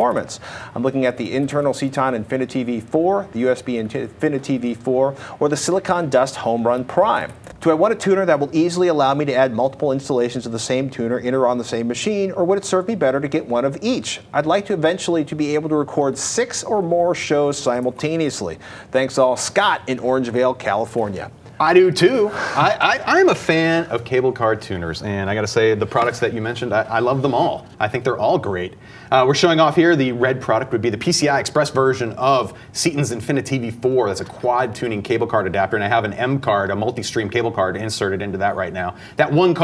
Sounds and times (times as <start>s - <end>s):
Speech: 0.0s - 39.6s.